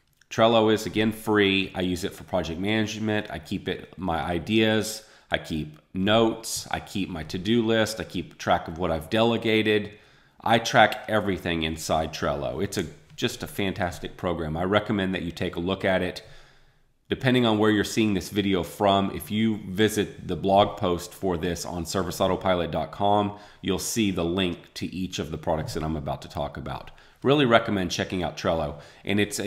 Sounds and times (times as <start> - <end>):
Speech: 0.3 - 16.3, 17.1 - 29.4.